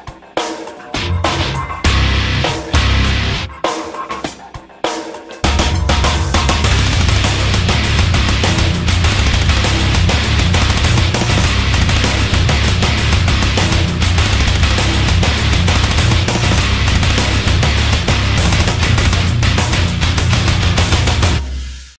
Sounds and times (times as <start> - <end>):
Dance music: 0.0 - 21.9.